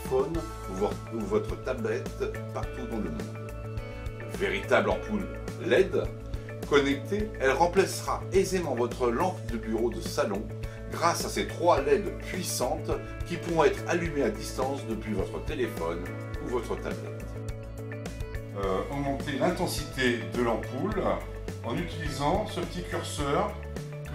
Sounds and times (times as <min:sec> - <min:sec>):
Speech: 0:00.0 - 0:03.3, 0:04.4 - 0:06.1, 0:06.7 - 0:17.2, 0:18.6 - 0:23.6
Music: 0:00.0 - 0:24.1.